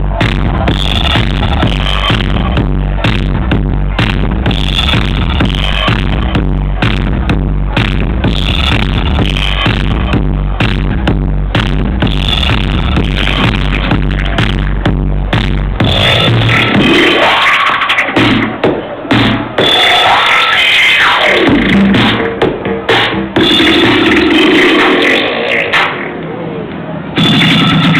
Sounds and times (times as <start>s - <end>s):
Techno: 0.0s - 26.2s, 27.1s - 27.9s.